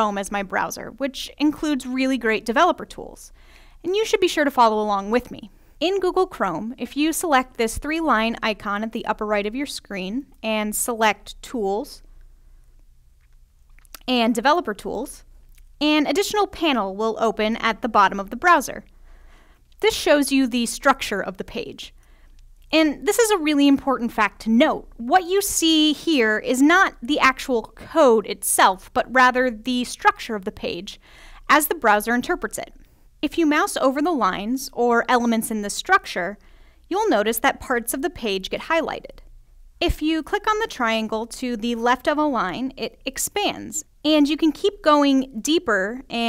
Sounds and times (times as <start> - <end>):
Speech: 0.0 - 12.0, 14.0 - 18.9, 19.8 - 22.0, 22.7 - 39.2, 39.8 - 46.2.